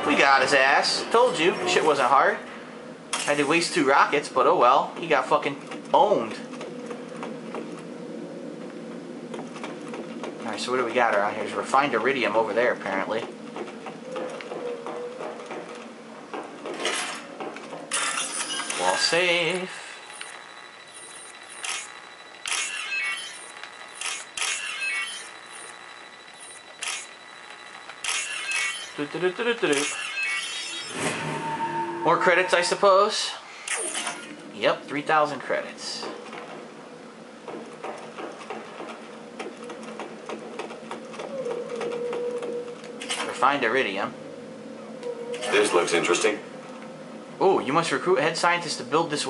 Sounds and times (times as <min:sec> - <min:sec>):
Speech: 0:00.0 - 0:02.4, 0:03.3 - 0:06.5, 0:10.4 - 0:13.3, 0:18.8 - 0:19.8, 0:29.0 - 0:29.8, 0:32.0 - 0:33.4, 0:34.6 - 0:36.2, 0:45.5 - 0:46.4, 0:47.4 - 0:49.2.